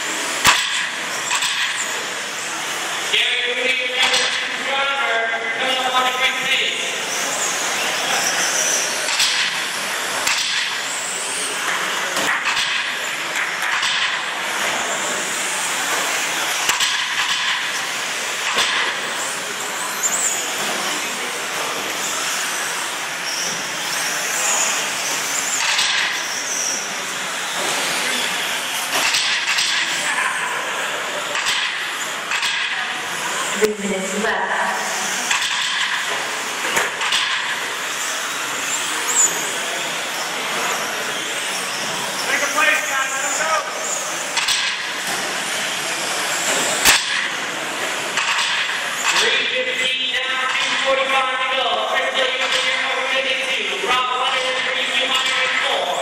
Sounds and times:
Inside, large room or hall: 0:00.0 - 0:56.0
Speech: 0:03.1 - 0:07.0, 0:42.3 - 0:43.8, 0:49.1 - 0:56.0.

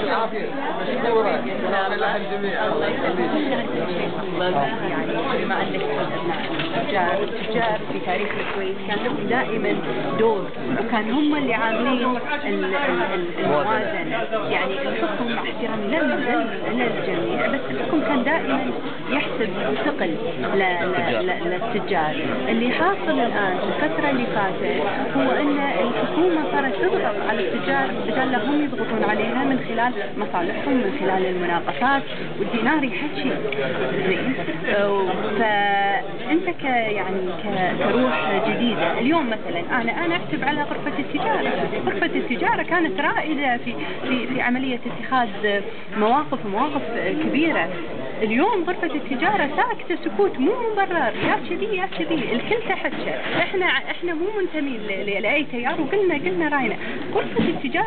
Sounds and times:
Inside, large room or hall: 0:00.0 - 0:57.8
Speech: 0:00.0 - 0:57.8.

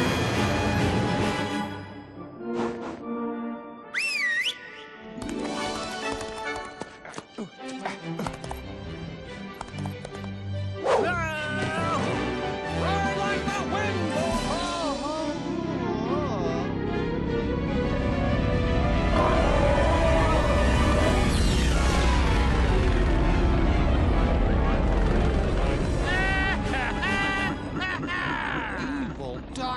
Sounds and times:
Music: 0:00.0 - 0:29.6
Speech: 0:11.0 - 0:12.0.

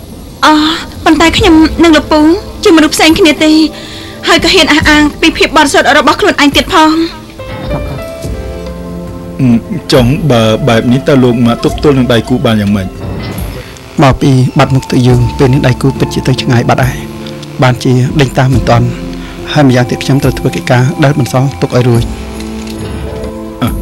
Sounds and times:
Music: 0:00.4 - 0:23.8.

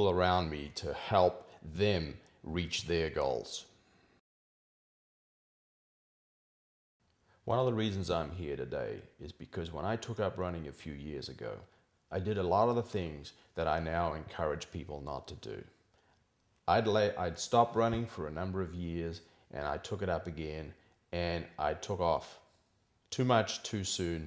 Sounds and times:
Speech: 0:00.0 - 0:03.7, 0:07.5 - 0:15.8, 0:16.7 - 0:22.5, 0:23.1 - 0:24.2
Inside, small room: 0:00.0 - 0:04.3, 0:07.0 - 0:24.2.

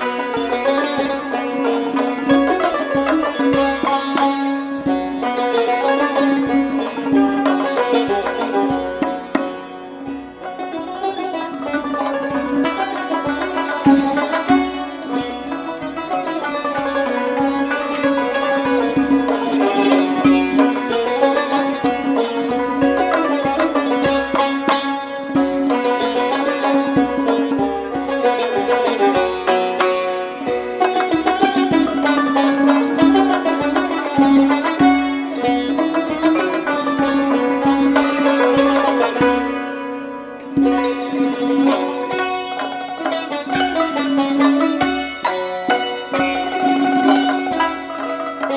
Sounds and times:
Traditional music: 0:00.0 - 0:48.5.

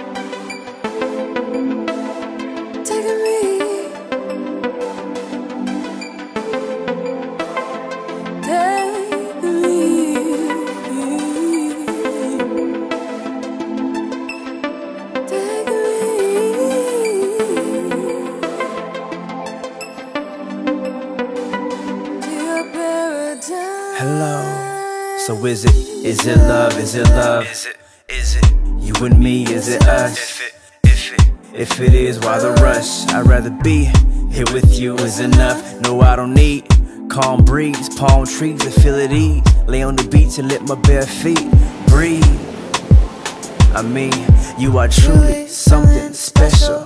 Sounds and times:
Music: 0:00.0 - 0:46.8.

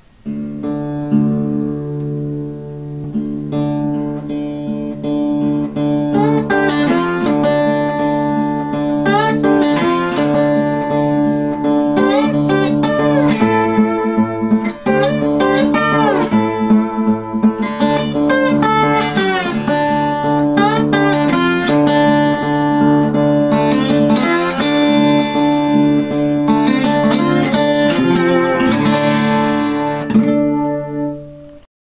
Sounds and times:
Strum: 0:00.0 - 0:31.7.

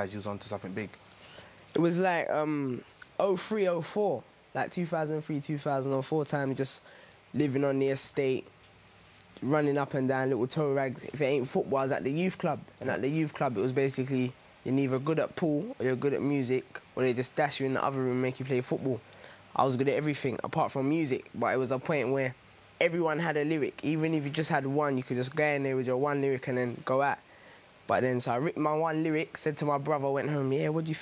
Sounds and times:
Speech: 0:00.0 - 0:01.0, 0:01.7 - 0:08.5, 0:09.4 - 0:19.0, 0:19.6 - 0:27.2, 0:27.9 - 0:31.0.

